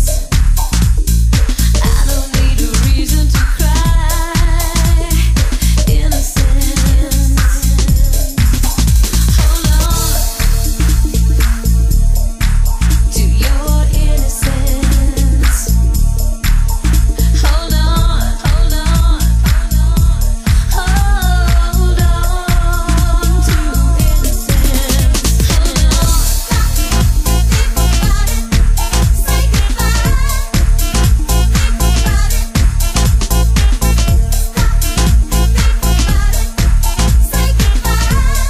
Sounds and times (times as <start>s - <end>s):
Disco: 0.0s - 38.4s.